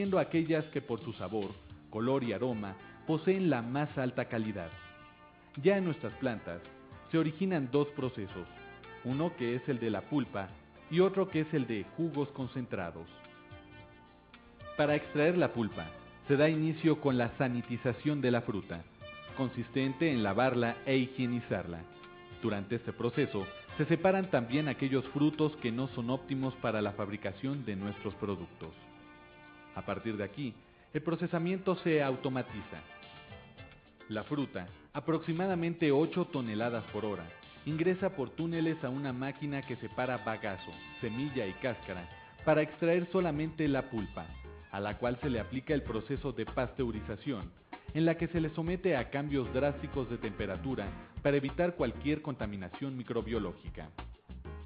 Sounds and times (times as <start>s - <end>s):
Speech: 0.0s - 4.7s, 5.6s - 8.5s, 9.1s - 13.1s, 14.8s - 28.8s, 29.8s - 32.9s, 34.1s - 54.0s
Music: 0.0s - 54.6s.